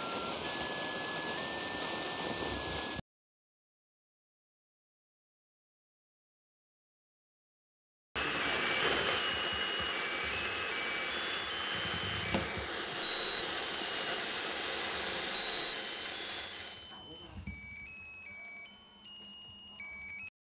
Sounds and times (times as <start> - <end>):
Music: 9.6 - 14.4, 16.8 - 20.3
Speech: 16.9 - 17.6.